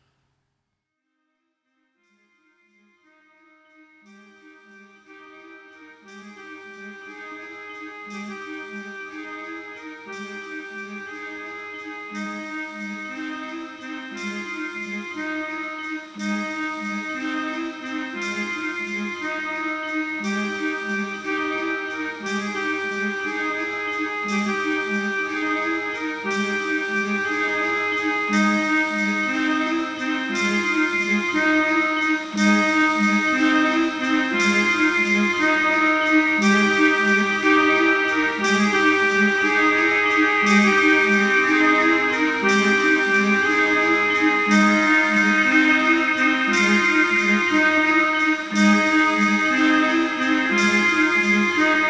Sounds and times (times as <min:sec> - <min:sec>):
Background music: 0:02.1 - 0:51.9.